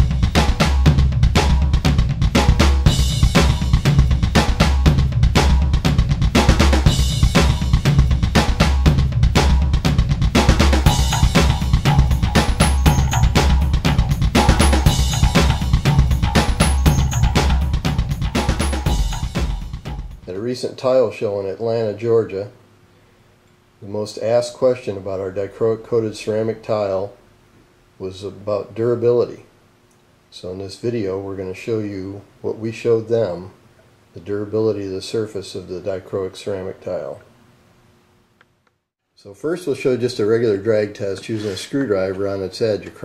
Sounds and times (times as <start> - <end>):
Bass drum: 0.0 - 20.3
Speech: 20.3 - 22.6, 23.8 - 27.2, 28.0 - 29.5, 30.3 - 33.6, 34.2 - 37.3, 39.2 - 43.0.